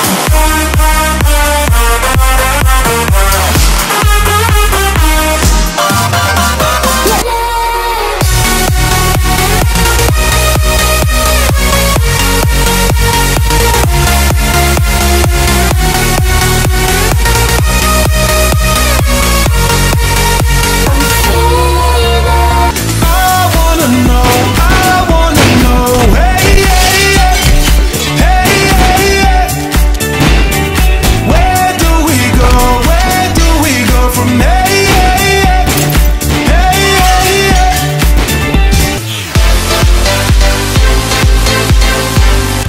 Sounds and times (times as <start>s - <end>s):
Dubstep: 0.0s - 42.6s
Electronic dance music: 0.0s - 42.6s
Electronica: 0.0s - 42.6s
House music: 0.0s - 42.6s
Techno: 0.0s - 42.6s
Trance music: 0.0s - 42.6s.